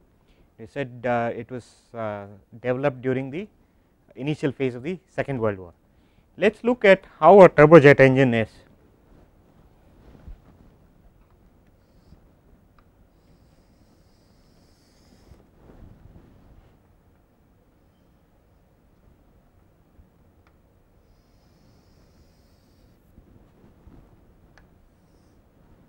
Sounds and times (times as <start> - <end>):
Speech: 0.6 - 3.5, 4.1 - 5.8, 6.4 - 8.7.